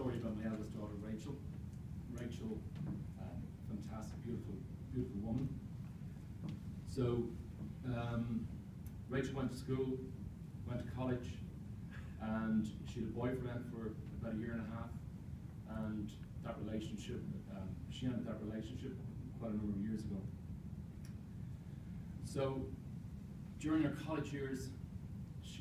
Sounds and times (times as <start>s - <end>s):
Male speech, man speaking: 0.0s - 1.5s, 2.1s - 5.6s, 6.9s - 8.5s, 9.1s - 10.1s, 10.7s - 11.5s, 12.2s - 15.0s, 15.7s - 20.3s, 22.2s - 22.8s, 23.6s - 24.8s
Narration, monologue: 0.0s - 25.6s.